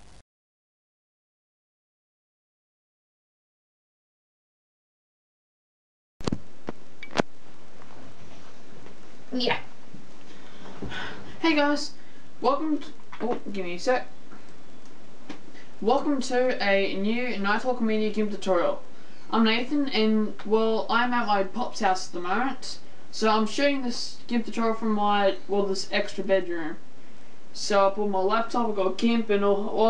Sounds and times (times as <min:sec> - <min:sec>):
Speech: 0:09.3 - 0:09.7, 0:11.4 - 0:14.1, 0:15.8 - 0:26.8, 0:27.5 - 0:29.8.